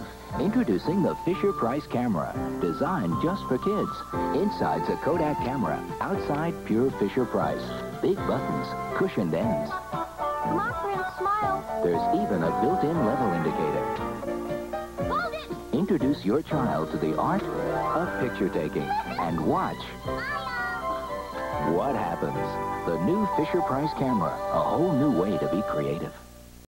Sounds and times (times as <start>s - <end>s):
Music: 0.0s - 26.7s
Speech: 0.4s - 9.8s, 10.5s - 14.0s, 15.1s - 20.5s, 21.6s - 26.2s.